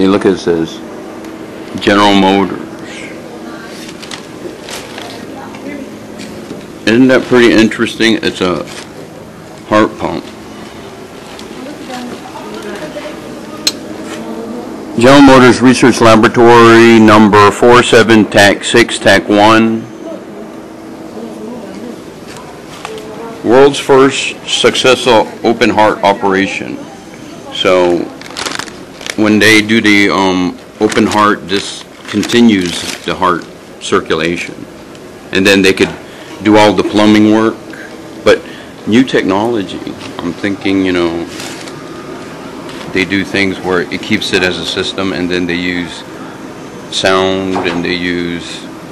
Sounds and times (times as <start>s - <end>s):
Speech: 6.9s - 8.7s, 15.0s - 20.3s, 29.2s - 34.6s, 38.3s - 41.3s, 42.9s - 46.1s, 46.9s - 48.7s.